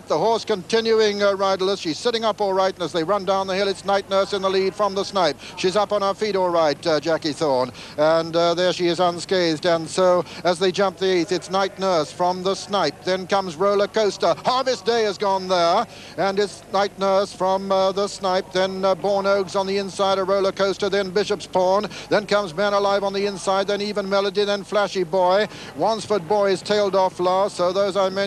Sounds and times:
Speech: 0:00.0 - 0:28.2.

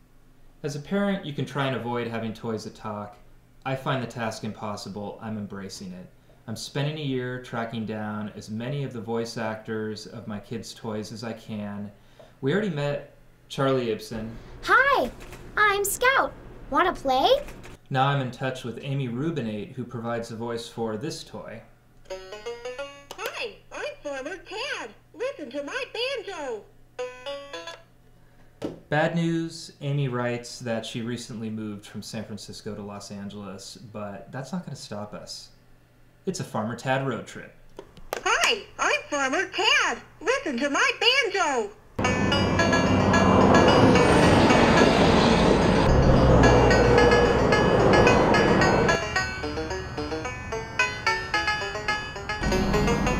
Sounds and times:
Speech: 0:00.6 - 0:21.7, 0:23.2 - 0:26.7, 0:28.9 - 0:35.5, 0:36.3 - 0:37.6.

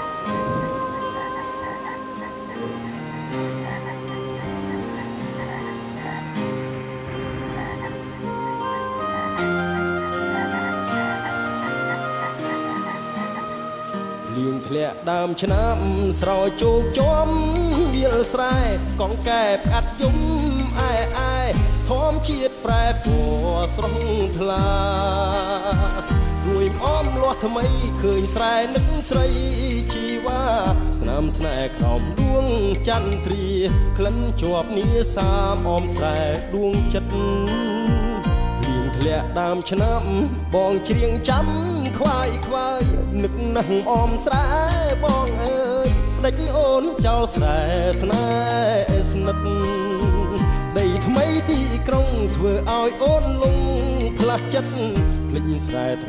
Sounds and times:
Music: 0:00.0 - 0:56.0.

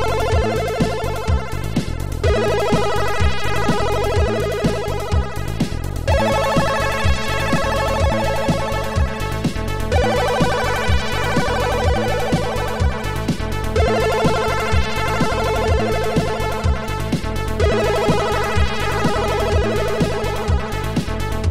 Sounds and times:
Music: 0:00.0 - 0:21.5.

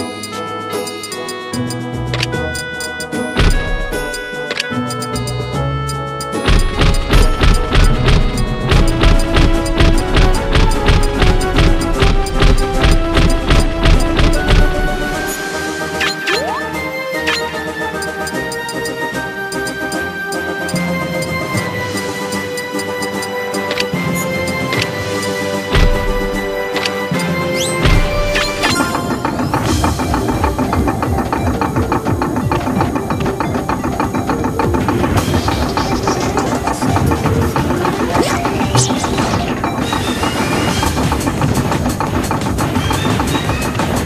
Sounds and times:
Music: 0:00.0 - 0:44.0.

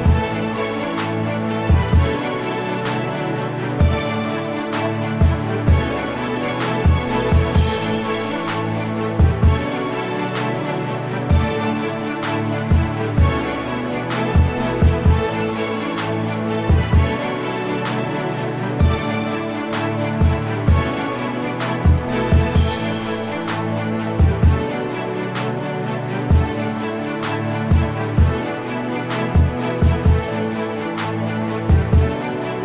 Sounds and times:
Music: 0:00.0 - 0:32.6.

